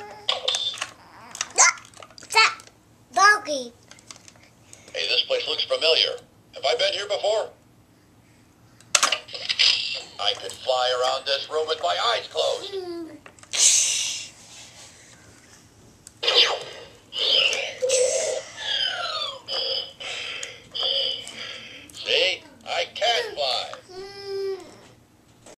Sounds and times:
Speech: 22.0 - 23.9.

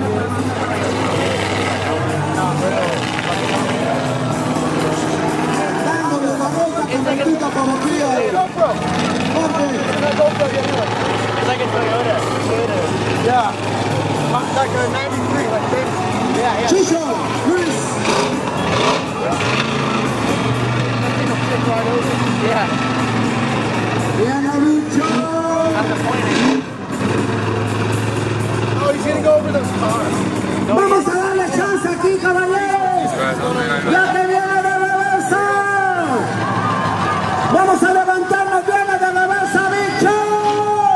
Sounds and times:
Truck: 0.0 - 40.9.

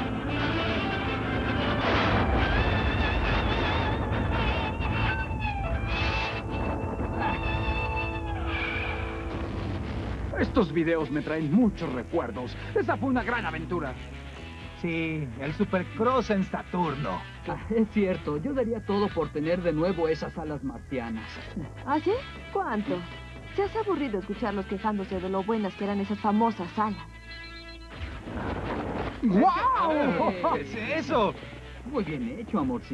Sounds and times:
Music: 0.0 - 32.9.

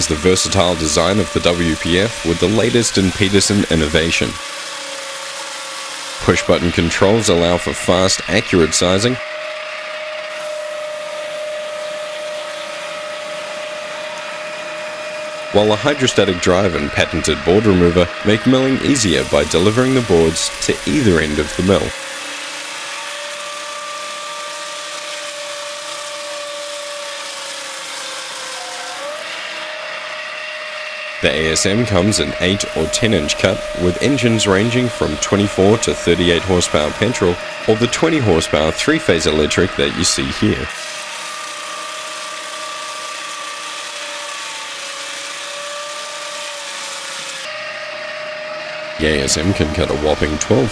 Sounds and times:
Speech: 0.0 - 4.4, 6.2 - 9.2, 15.5 - 22.0, 31.2 - 40.7, 49.0 - 50.7.

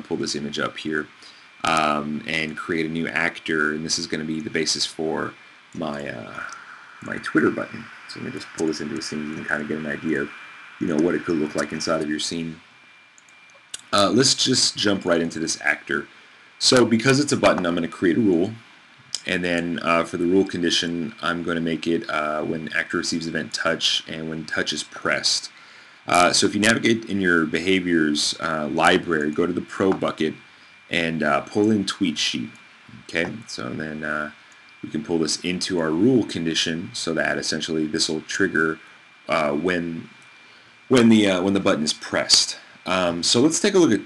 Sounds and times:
Speech: 0.0 - 12.6, 13.8 - 18.6, 19.2 - 40.2, 40.9 - 44.0.

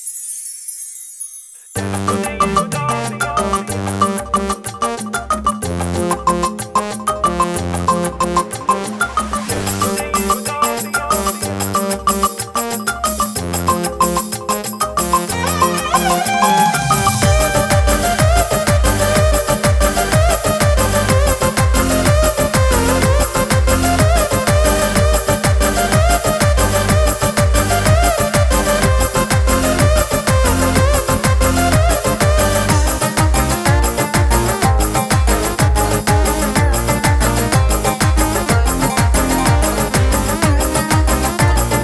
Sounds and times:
Music: 1.7 - 41.8.

